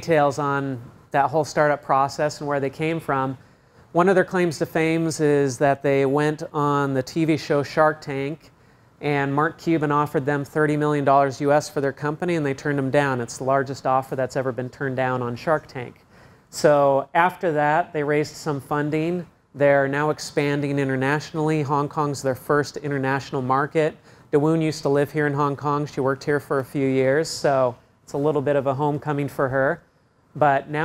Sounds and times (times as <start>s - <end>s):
Speech: 0.0s - 16.0s, 16.6s - 29.8s, 30.4s - 30.8s.